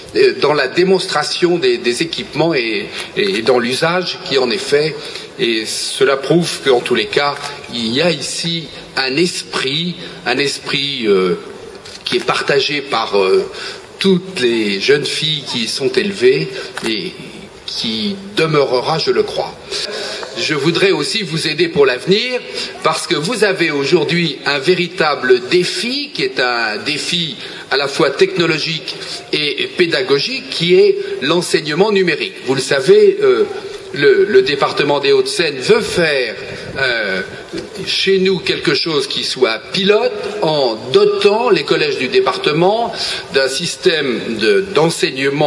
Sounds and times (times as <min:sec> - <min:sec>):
Narration, monologue: 0:00.0 - 0:45.4.